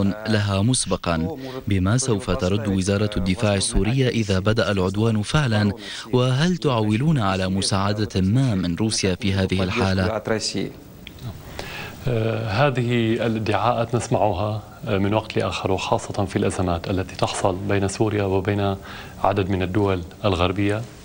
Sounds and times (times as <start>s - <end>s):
Speech: 0.0s - 10.8s, 12.1s - 20.9s.